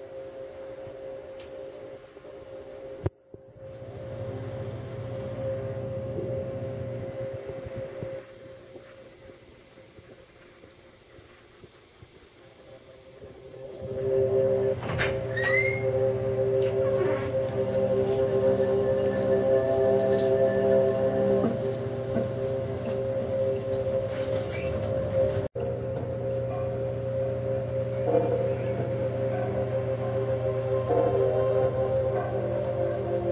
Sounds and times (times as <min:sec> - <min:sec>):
Music: 0:00.0 - 0:09.4, 0:12.6 - 0:33.3.